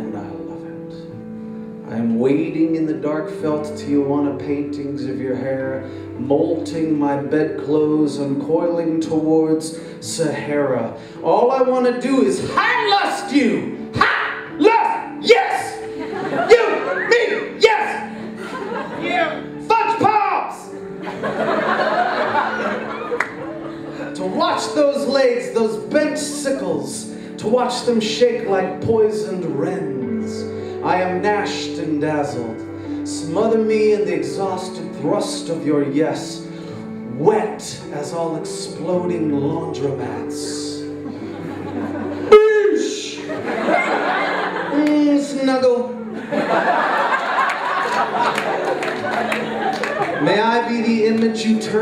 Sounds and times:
Speech: 0.0s - 1.0s, 1.9s - 15.8s, 19.0s - 20.7s, 24.2s - 36.4s, 42.3s - 43.3s, 44.7s - 46.0s, 50.2s - 51.8s
Inside, large room or hall: 0.0s - 51.8s
Music: 0.0s - 51.8s.

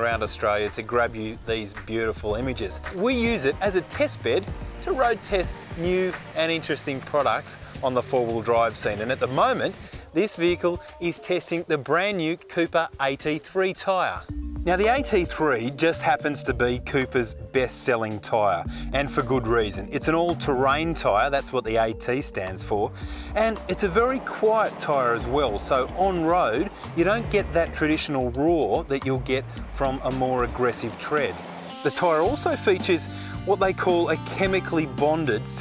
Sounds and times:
Music: 0.0s - 35.6s
Speech: 0.0s - 35.6s.

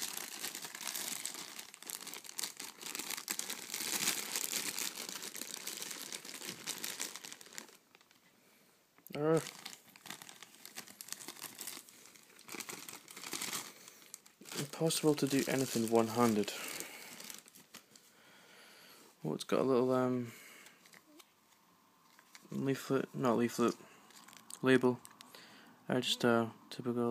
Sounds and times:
Crumpling, crinkling: 0.0s - 8.3s, 9.1s - 18.1s, 20.6s - 22.6s, 23.6s - 25.4s
Inside, small room: 0.0s - 27.1s
Speech: 9.1s - 9.5s, 14.5s - 16.6s, 19.2s - 20.3s, 22.5s - 23.8s, 24.6s - 25.0s, 25.9s - 27.1s.

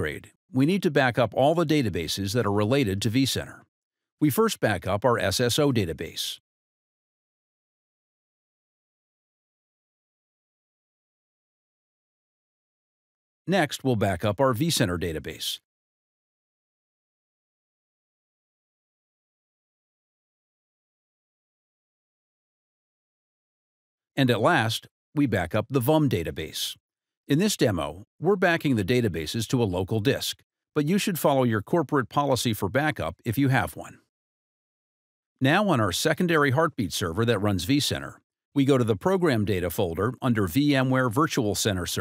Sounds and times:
Speech: 0.0s - 6.4s, 13.5s - 15.7s, 24.2s - 34.1s, 35.4s - 42.0s.

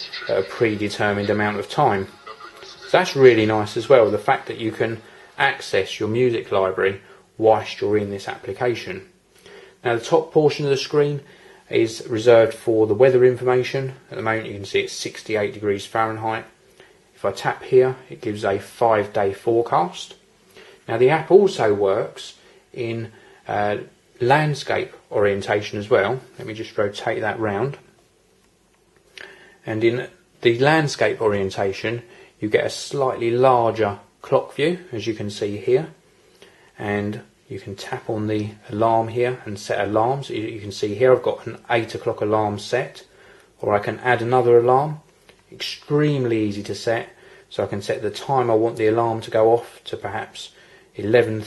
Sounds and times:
Speech: 0.0s - 9.2s, 9.8s - 16.6s, 17.2s - 20.2s, 20.9s - 28.0s, 29.6s - 36.0s, 36.8s - 51.4s.

